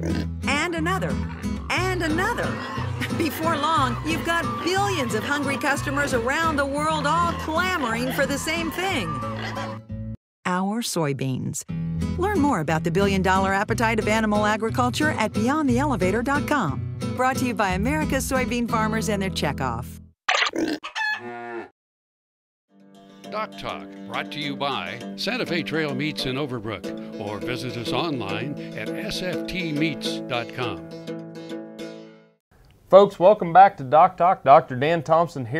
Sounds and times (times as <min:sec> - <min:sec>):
Music: 0:00.0 - 0:10.2, 0:11.7 - 0:20.1, 0:22.7 - 0:32.4
Speech: 0:10.5 - 0:11.6, 0:23.4 - 0:30.8, 0:32.9 - 0:35.6.